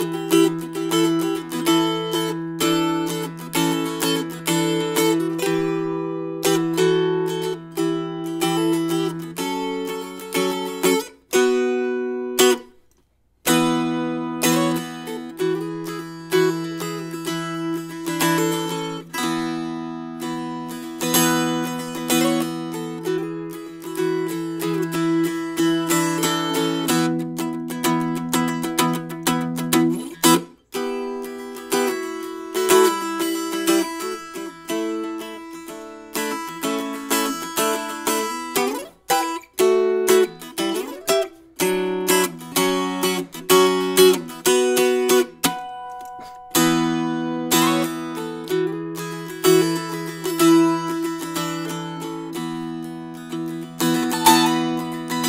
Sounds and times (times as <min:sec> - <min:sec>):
Music: 0:00.0 - 0:55.2.